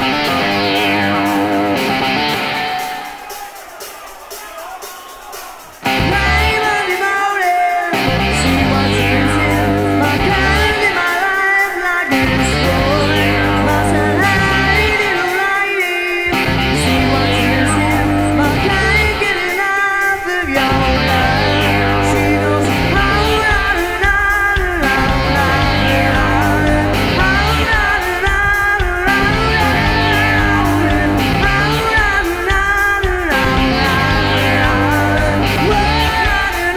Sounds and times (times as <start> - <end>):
Music: 0.0 - 36.7.